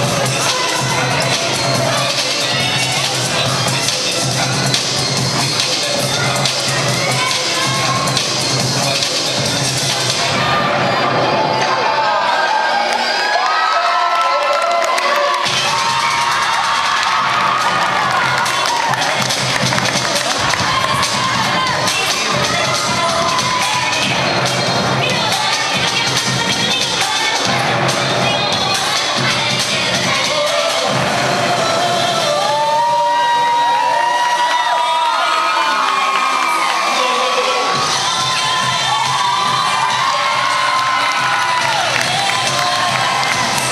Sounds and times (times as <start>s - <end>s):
Music: 0.0s - 11.8s, 15.4s - 43.7s
Cheering: 0.0s - 43.7s.